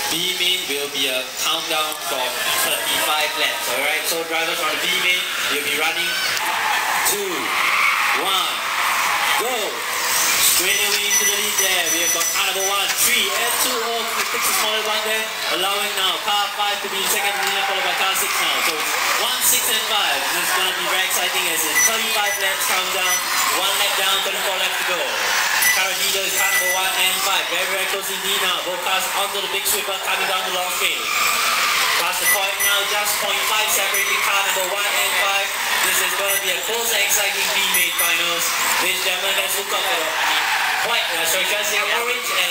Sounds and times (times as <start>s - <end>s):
Speech: 0.0s - 6.4s, 7.0s - 8.7s, 9.3s - 9.8s, 10.4s - 31.2s, 32.0s - 42.5s.